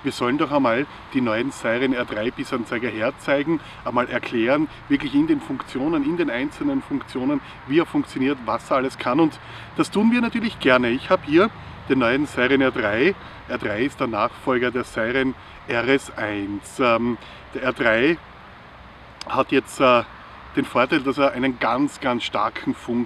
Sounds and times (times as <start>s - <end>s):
Speech: 0.0s - 18.2s, 19.2s - 23.0s.